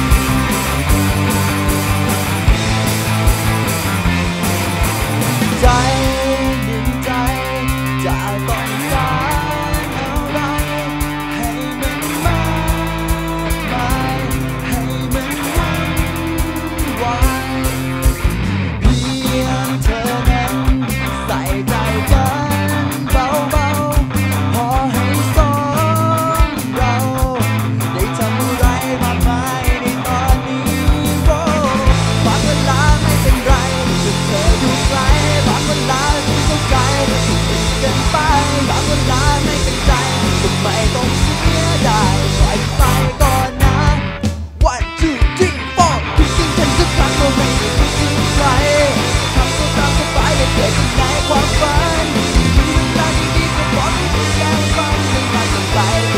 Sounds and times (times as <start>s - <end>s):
Funk: 0.0s - 56.1s.